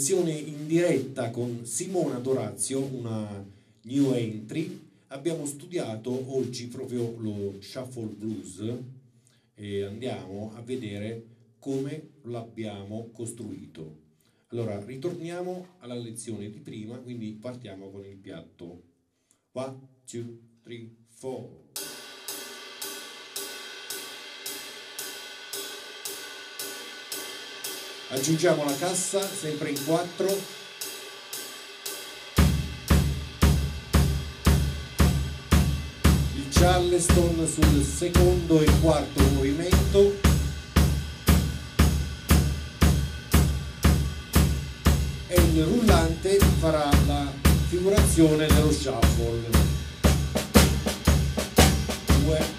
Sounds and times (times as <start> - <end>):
Speech: 0.0 - 8.9, 9.6 - 18.8, 19.6 - 21.6, 28.1 - 30.5, 36.3 - 40.3, 45.3 - 49.7, 52.1 - 52.5
Music: 21.8 - 52.5.